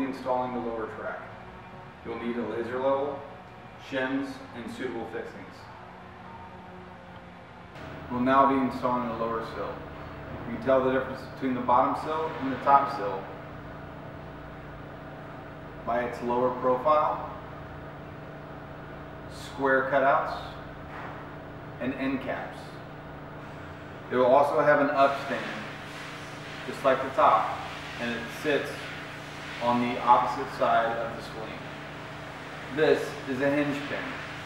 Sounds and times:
Speech: 0.0s - 1.3s, 2.0s - 5.7s, 8.1s - 9.8s, 10.4s - 13.3s, 15.8s - 17.4s, 19.3s - 20.6s, 21.8s - 22.8s, 24.1s - 25.8s, 26.7s - 28.8s, 29.6s - 31.6s, 32.7s - 34.2s.

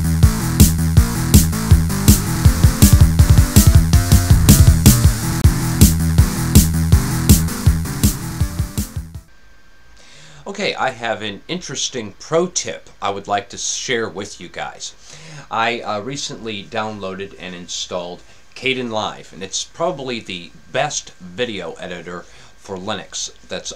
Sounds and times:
Sampler: 1.1s - 6.8s.

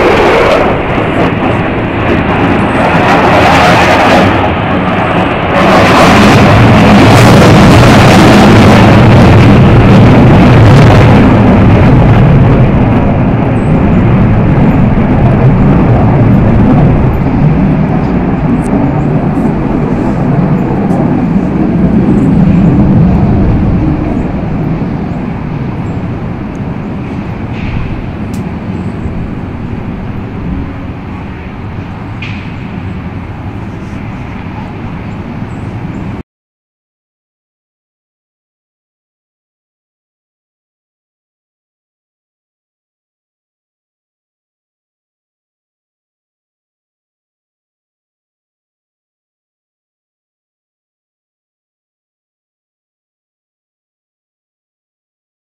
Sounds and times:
Aircraft: 0.0s - 36.3s.

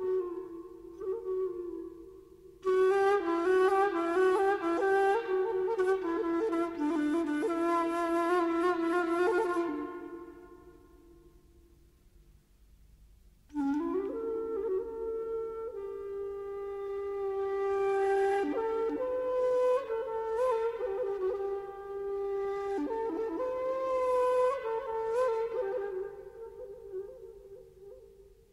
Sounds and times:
Flute: 0.0s - 11.8s, 13.5s - 28.5s.

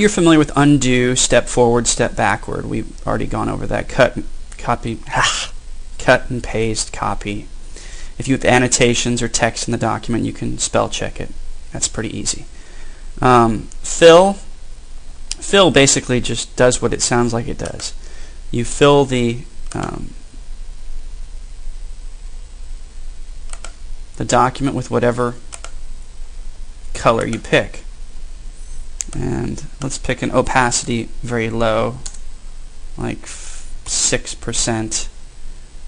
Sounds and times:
Speech: 0.0s - 7.5s, 8.2s - 12.5s, 13.2s - 14.5s, 15.3s - 20.2s, 24.2s - 25.4s, 26.9s - 27.9s, 29.0s - 32.0s, 33.0s - 35.2s.

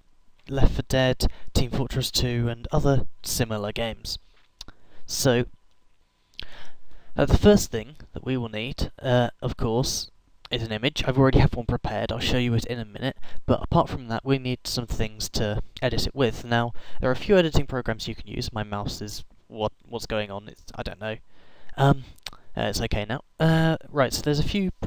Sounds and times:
Speech: 0.5s - 4.2s, 5.1s - 5.6s, 7.2s - 21.2s, 21.8s - 24.8s.

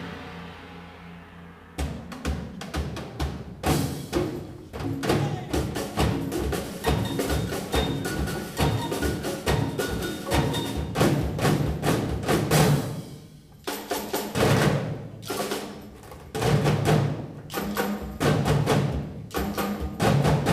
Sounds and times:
Music: 0.0s - 20.5s.

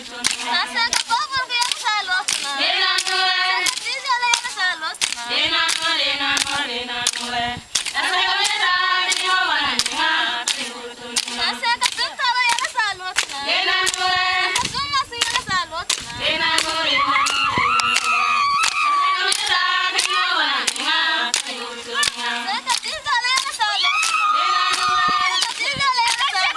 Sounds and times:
Choir: 0.0s - 26.5s
Female singing: 0.0s - 26.5s
Speech: 11.6s - 13.5s, 22.0s - 26.5s.

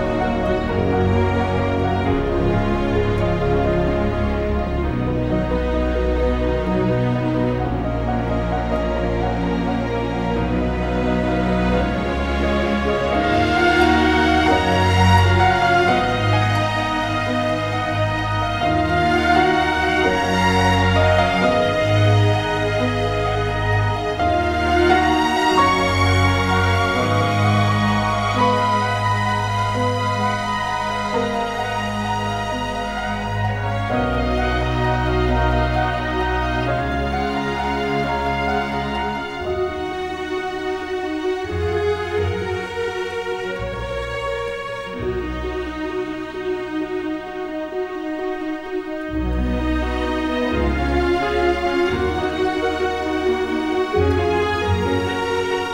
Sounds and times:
Background music: 0.0s - 55.7s.

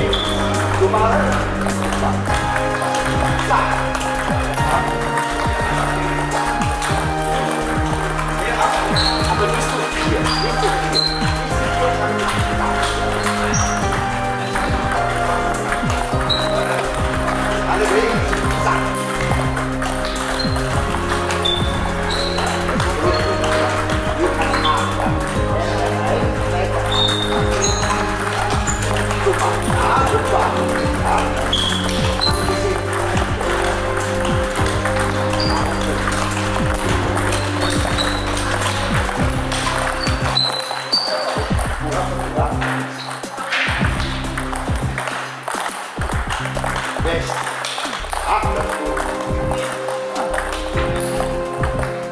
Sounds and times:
Speech: 0.0s - 2.3s, 17.6s - 19.0s, 24.2s - 27.8s, 29.2s - 31.4s, 41.8s - 42.9s, 47.0s - 47.4s, 48.2s - 49.2s
Music: 0.0s - 52.1s.

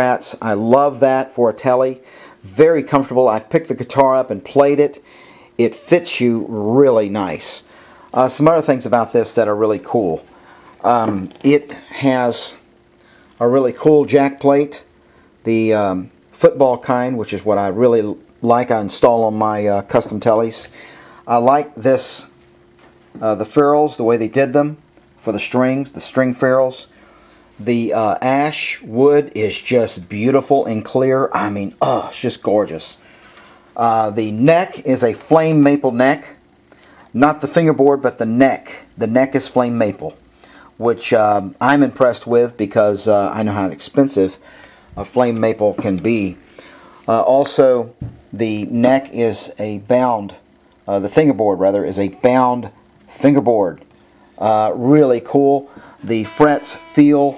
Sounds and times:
Speech: 0.0s - 5.0s, 5.6s - 12.7s, 13.4s - 22.3s, 23.2s - 26.9s, 27.6s - 33.0s, 33.8s - 36.4s, 37.1s - 40.2s, 40.8s - 44.4s, 45.0s - 46.4s, 47.1s - 57.3s.

